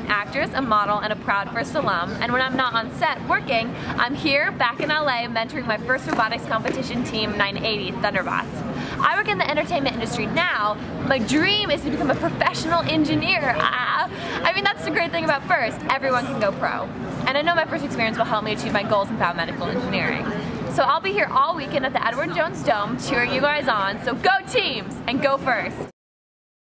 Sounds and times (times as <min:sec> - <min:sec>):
Speech: 0:00.0 - 0:25.9.